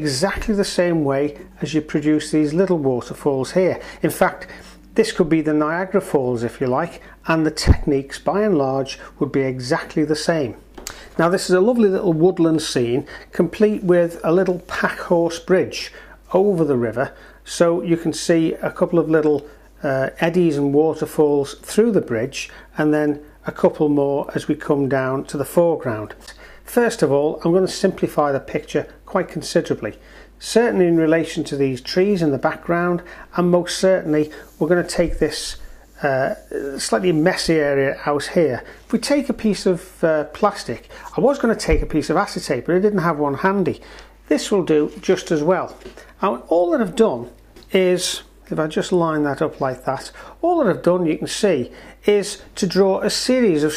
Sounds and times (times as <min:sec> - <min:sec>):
Speech: 0:00.0 - 0:53.7.